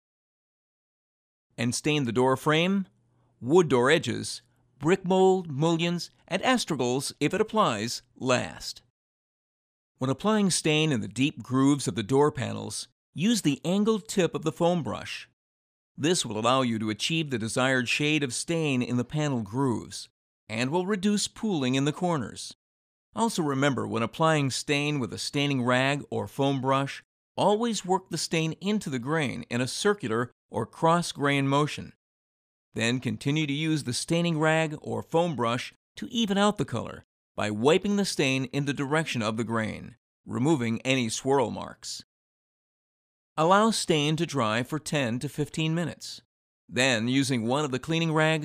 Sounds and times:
Speech: 1.6s - 8.9s, 10.0s - 15.4s, 16.0s - 22.6s, 23.2s - 32.0s, 32.8s - 42.1s, 43.4s - 48.4s.

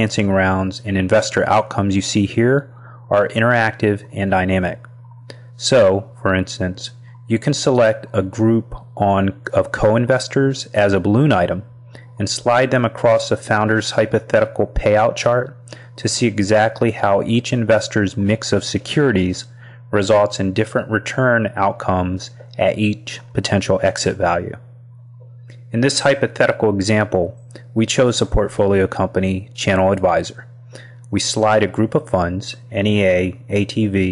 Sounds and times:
Speech: 0.0s - 24.7s, 25.6s - 34.1s.

